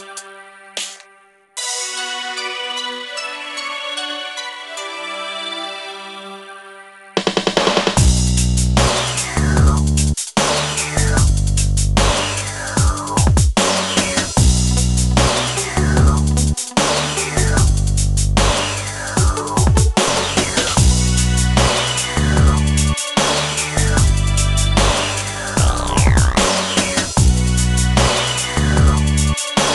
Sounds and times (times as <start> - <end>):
Bass drum: 8.0 - 10.2, 10.9 - 16.6, 17.4 - 18.6, 19.2 - 21.7, 25.6 - 28.1.